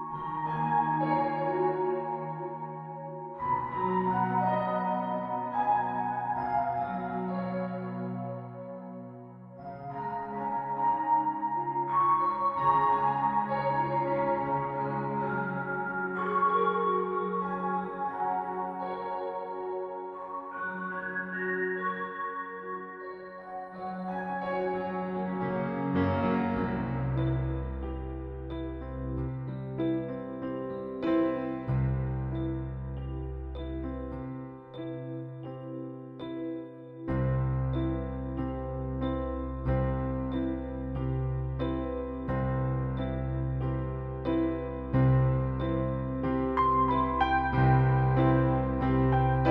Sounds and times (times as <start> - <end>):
Lullaby: 0.0 - 43.6, 44.2 - 49.5.